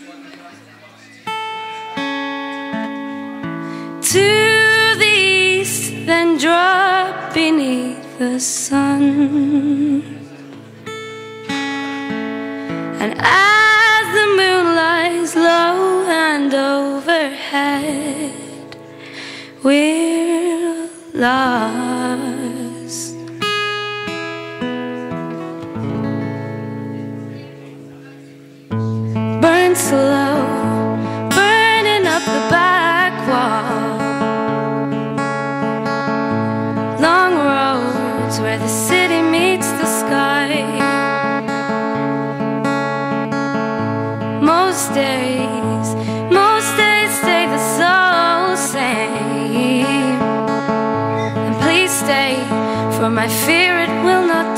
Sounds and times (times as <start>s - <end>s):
Music: 0.0s - 54.5s.